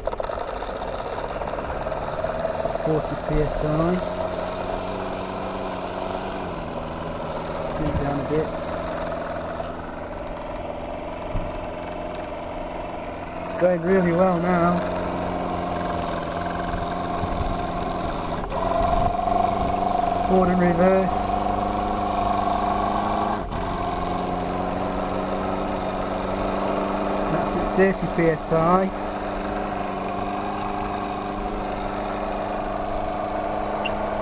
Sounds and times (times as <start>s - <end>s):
Engine: 0.0s - 34.2s
Speech: 2.8s - 4.1s, 7.8s - 8.6s, 13.5s - 14.9s, 20.3s - 21.4s, 27.3s - 29.0s.